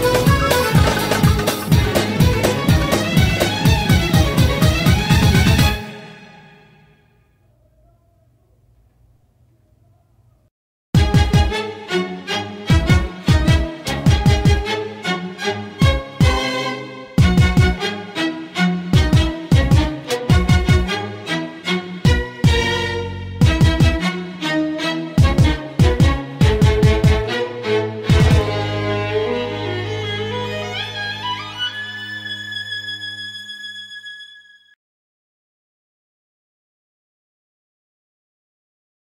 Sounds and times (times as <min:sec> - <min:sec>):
Violin, fiddle: 0:00.0 - 0:05.9, 0:11.0 - 0:34.4.